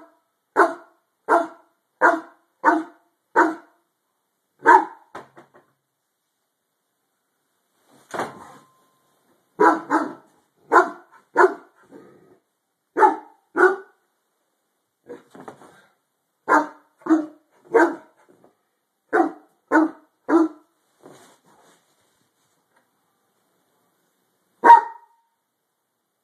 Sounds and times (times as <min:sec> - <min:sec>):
Bark: 0:00.0 - 0:03.8, 0:04.6 - 0:05.1, 0:09.6 - 0:11.8, 0:13.0 - 0:14.0, 0:16.5 - 0:18.2, 0:19.1 - 0:20.7, 0:24.6 - 0:25.3.